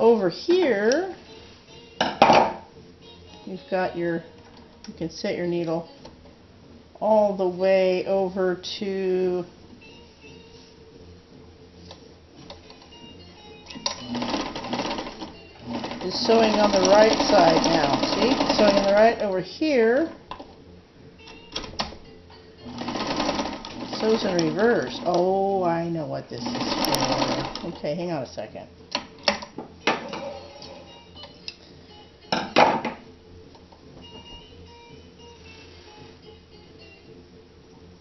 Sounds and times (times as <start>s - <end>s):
Music: 0.0s - 38.0s
Sewing machine: 13.8s - 19.2s, 22.7s - 25.2s, 26.4s - 27.8s.